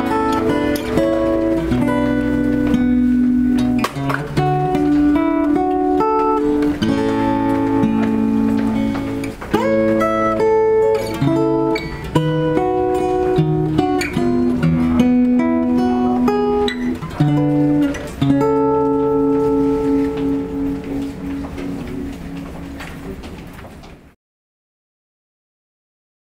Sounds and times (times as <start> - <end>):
Strum: 0.0 - 23.8
Acoustic guitar: 0.0 - 24.2.